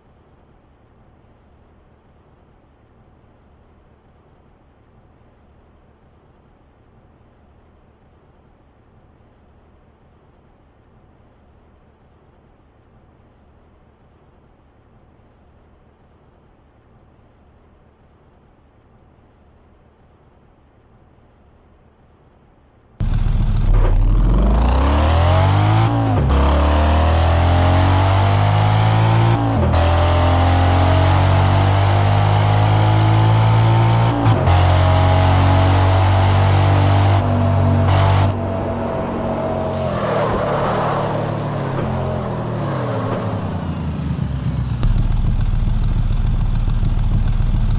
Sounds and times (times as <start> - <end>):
Car: 0.0 - 47.7.